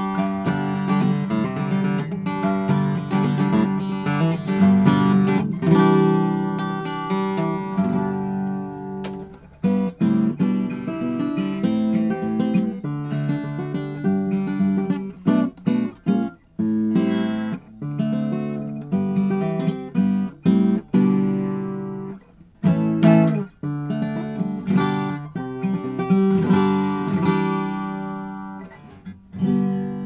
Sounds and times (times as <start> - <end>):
Strum: 0.0 - 30.0.